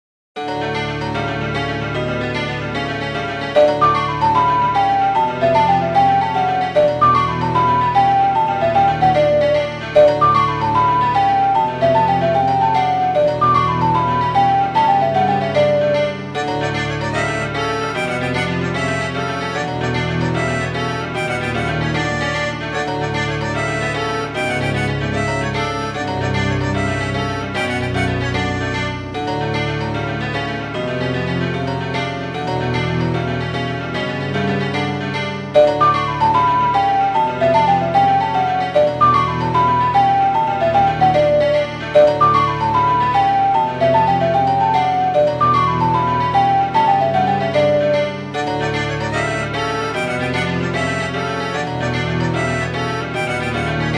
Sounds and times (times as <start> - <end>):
Music: 0.4 - 53.9.